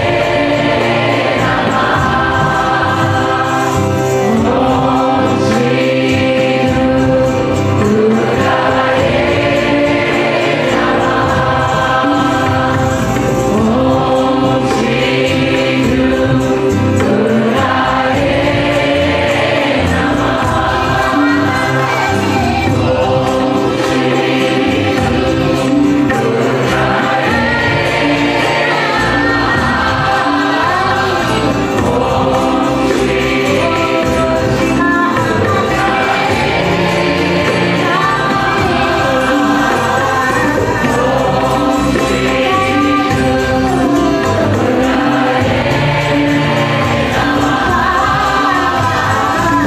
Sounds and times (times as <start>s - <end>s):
Mantra: 0.0s - 49.6s.